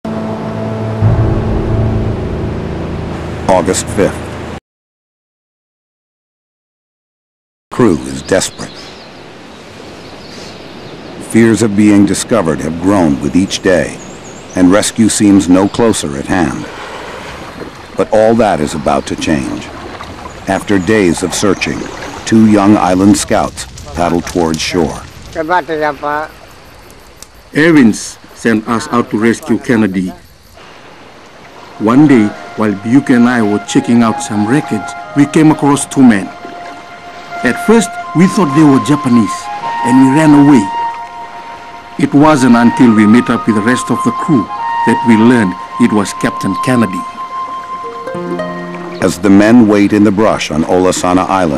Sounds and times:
Music: 0.0 - 4.4, 31.7 - 50.1
Outside, rural or natural: 0.0 - 4.6, 7.7 - 51.5
Silence: 0.1 - 4.6
Speech: 3.5 - 4.2, 7.7 - 8.8, 11.2 - 14.0, 14.6 - 16.7, 18.0 - 19.7, 20.5 - 26.3, 27.6 - 30.2, 31.8 - 36.3, 37.4 - 40.7, 42.0 - 47.1, 49.0 - 51.5.

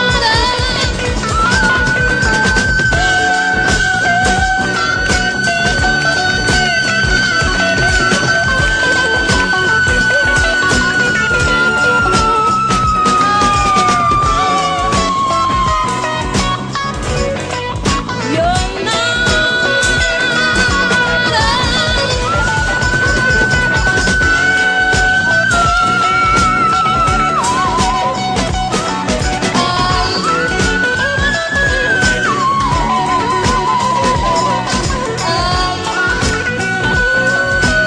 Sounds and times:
Singing: 0.0 - 17.4, 18.2 - 37.8
Music: 0.0 - 37.8.

